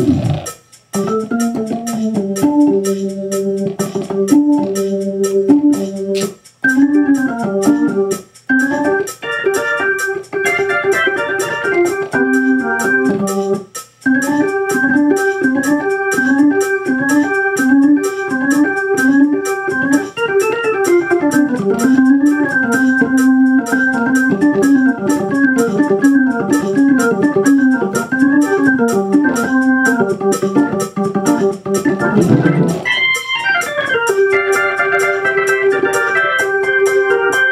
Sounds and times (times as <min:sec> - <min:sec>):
Organ: 0:00.0 - 0:37.5.